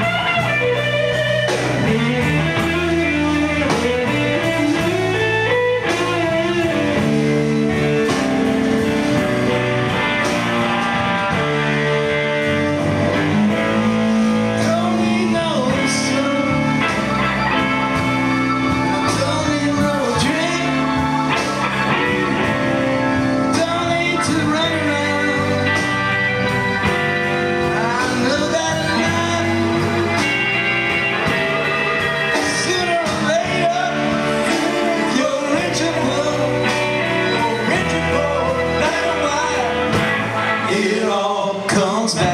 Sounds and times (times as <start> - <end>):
Blues: 0.0 - 42.3
Electric guitar: 0.0 - 42.3.